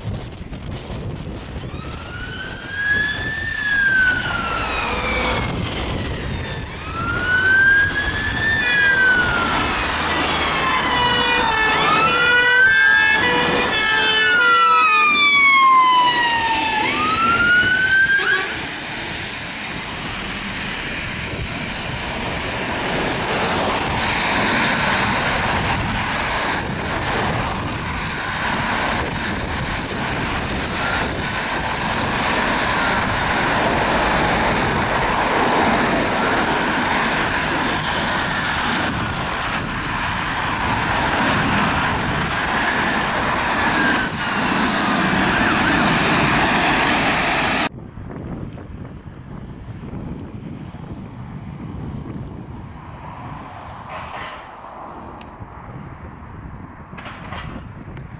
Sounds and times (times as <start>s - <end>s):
Police car (siren): 1.6s - 18.6s, 29.0s - 42.8s.